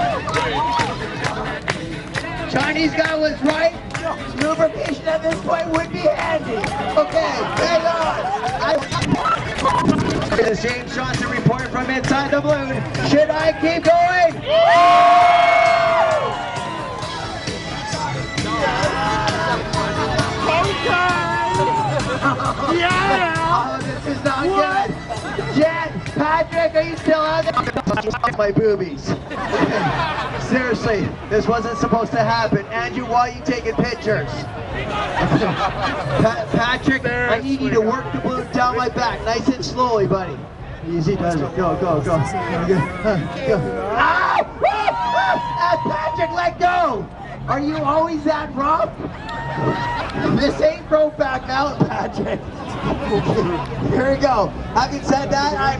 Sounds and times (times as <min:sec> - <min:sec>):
Music: 0:00.0 - 0:55.7.